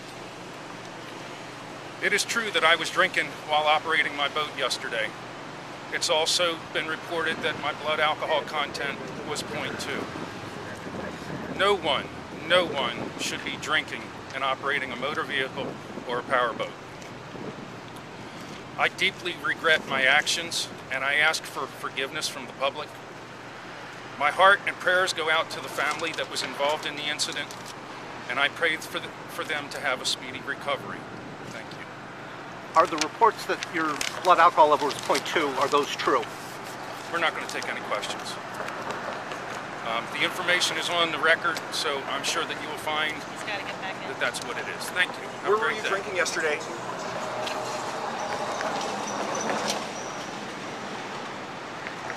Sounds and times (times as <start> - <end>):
Speech: 2.0 - 5.1, 5.9 - 10.1, 11.6 - 16.8, 18.8 - 22.9, 24.2 - 27.5, 28.3 - 31.9, 32.8 - 36.3, 37.1 - 38.4, 39.9 - 46.7.